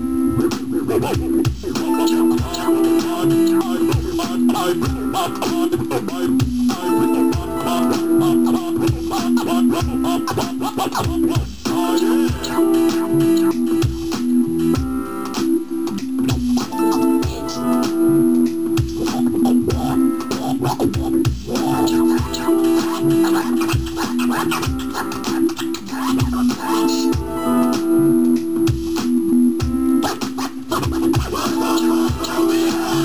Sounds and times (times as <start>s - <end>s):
Electronic music: 0.0s - 33.0s
Scratching (performance technique): 0.4s - 33.0s.